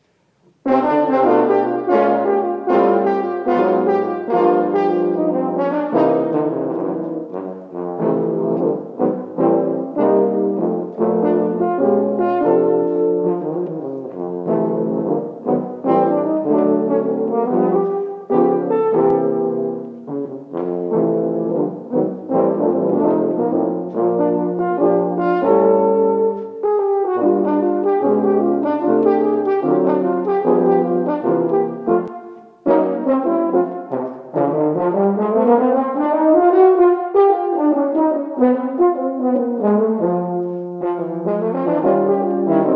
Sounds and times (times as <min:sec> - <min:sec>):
French horn: 0:00.4 - 0:42.7
Trombone: 0:00.6 - 0:42.7.